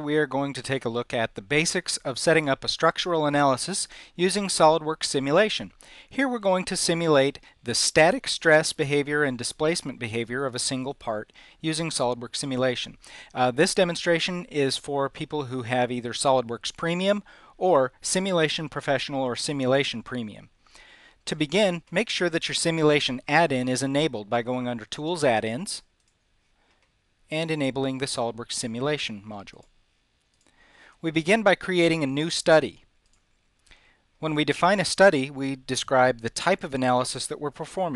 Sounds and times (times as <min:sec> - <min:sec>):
Speech: 0:00.0 - 0:20.5, 0:21.3 - 0:25.9, 0:27.3 - 0:29.7, 0:31.0 - 0:32.9, 0:34.2 - 0:37.9.